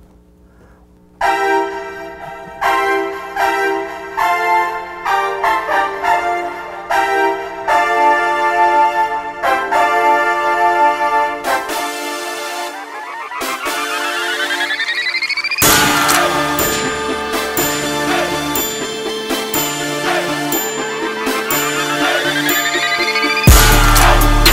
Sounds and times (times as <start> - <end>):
Music: 1.0 - 24.5.